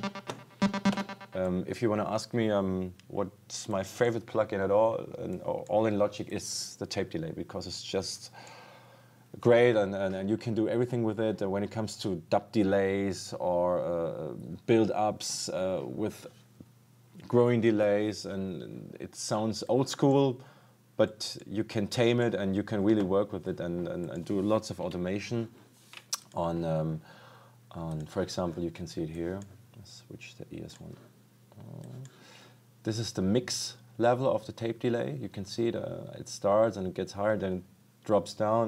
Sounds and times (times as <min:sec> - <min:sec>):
Speech: 0:01.3 - 0:08.4, 0:09.4 - 0:16.4, 0:17.2 - 0:25.6, 0:26.2 - 0:27.1, 0:27.7 - 0:32.1, 0:32.8 - 0:38.6.